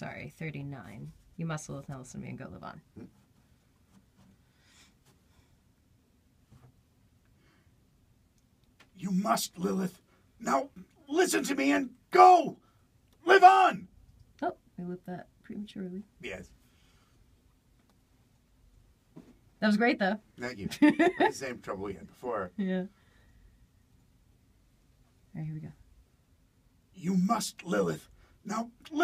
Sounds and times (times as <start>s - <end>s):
Inside, small room: 0.0s - 29.0s
Speech: 9.0s - 12.6s, 13.2s - 13.8s, 14.4s - 16.5s, 19.6s - 20.7s, 21.3s - 22.9s, 27.0s - 29.0s.